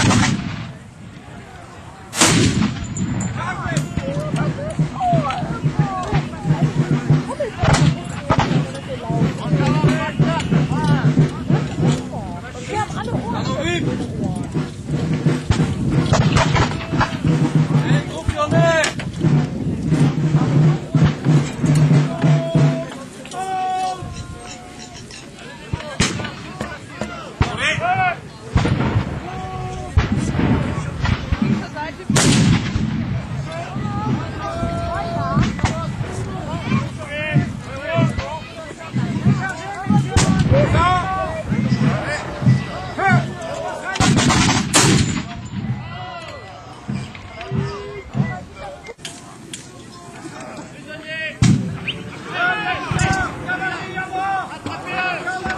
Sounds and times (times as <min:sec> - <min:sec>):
Artillery fire: 0:00.0 - 0:00.8, 0:02.1 - 0:03.4, 0:28.5 - 0:34.2, 0:44.0 - 0:45.4.